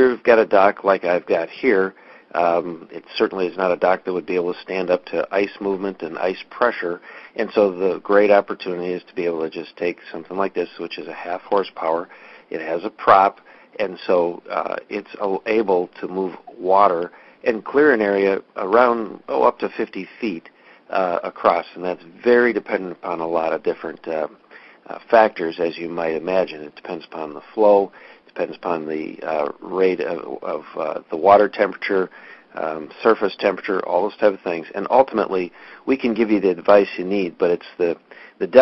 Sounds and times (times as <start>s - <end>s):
Speech: 0.0s - 38.6s.